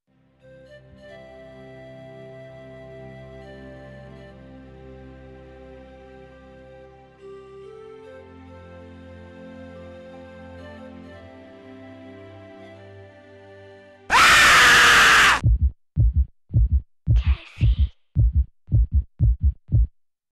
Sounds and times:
Music: 0:00.1 - 0:14.1
Speech: 0:17.2 - 0:17.9.

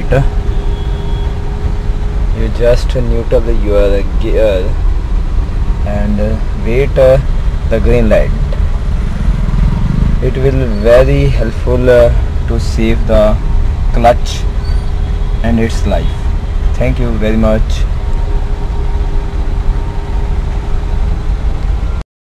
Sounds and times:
Speech: 0:00.0 - 0:00.3, 0:02.4 - 0:04.8, 0:05.9 - 0:08.4, 0:10.2 - 0:13.4, 0:14.0 - 0:14.5, 0:15.5 - 0:17.9
Car: 0:00.0 - 0:22.0.

